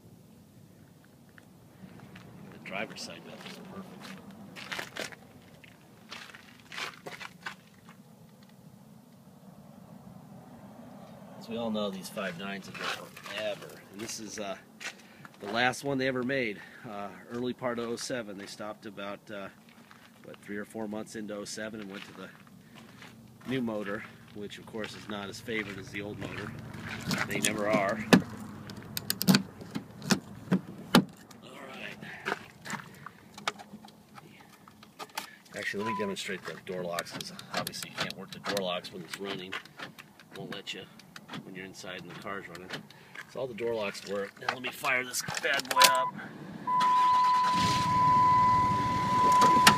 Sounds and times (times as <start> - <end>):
Speech: 2.6 - 4.1, 11.4 - 14.6, 15.4 - 19.6, 20.3 - 22.4, 23.4 - 26.5, 27.1 - 28.1, 31.4 - 32.1, 35.5 - 39.6, 40.3 - 46.1.